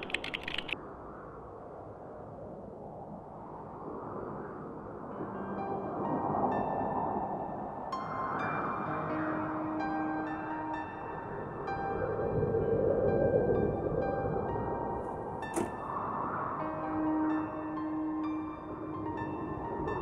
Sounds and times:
Music: 0:05.1 - 0:20.0.

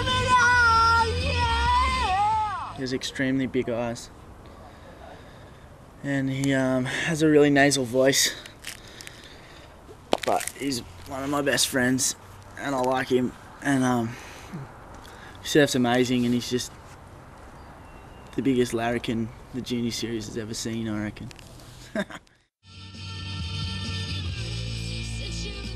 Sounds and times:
Speech: 0:02.8 - 0:04.1, 0:10.3 - 0:14.1, 0:15.4 - 0:16.7, 0:18.4 - 0:21.3
Music: 0:22.6 - 0:25.7.

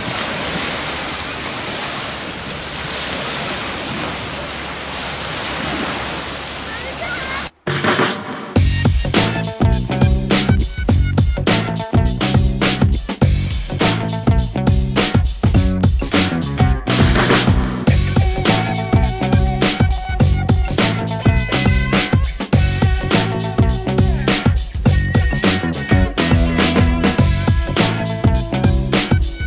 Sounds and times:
Speech: 0:06.7 - 0:07.5
Music: 0:07.7 - 0:29.4.

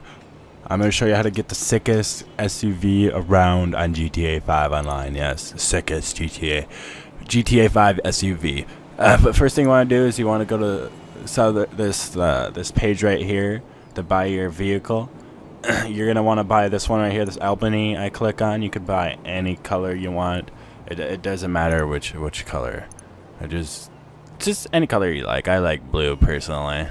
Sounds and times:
Speech: 0:00.6 - 0:15.1, 0:15.7 - 0:26.9.

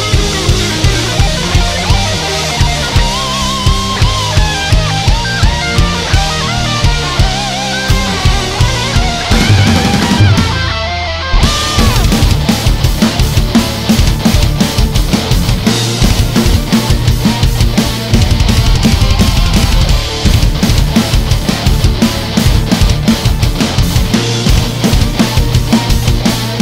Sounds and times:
Bass drum: 0:00.0 - 0:26.6
Drum kit: 0:00.0 - 0:26.6
Heavy metal: 0:00.0 - 0:26.6.

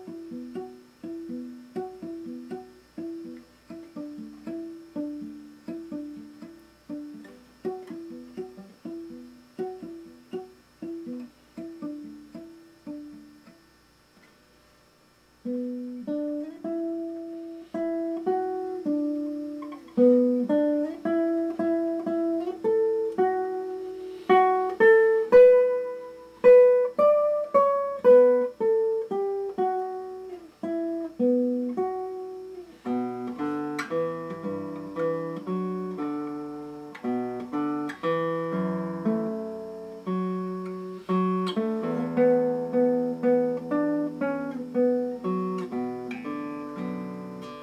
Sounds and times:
Music: 0:00.0 - 0:13.7, 0:15.4 - 0:47.6.

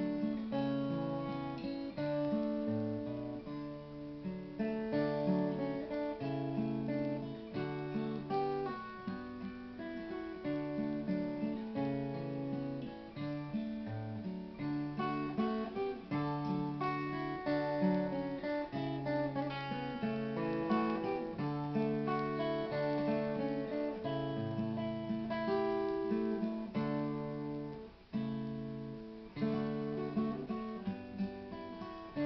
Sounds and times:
Music: 0:00.0 - 0:32.2.

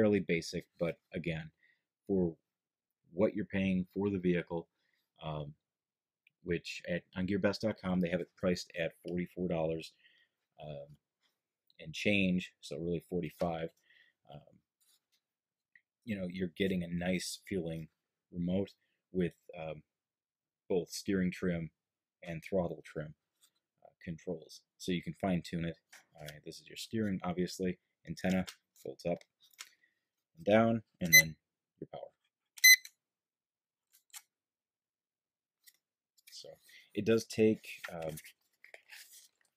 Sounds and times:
Speech: 0:00.0 - 0:02.4, 0:03.2 - 0:05.6, 0:06.5 - 0:10.0, 0:10.6 - 0:11.0, 0:11.8 - 0:14.4, 0:16.1 - 0:19.9, 0:20.7 - 0:23.2, 0:23.9 - 0:29.3, 0:30.4 - 0:32.2, 0:36.3 - 0:38.2
Inside, small room: 0:00.0 - 0:39.5.

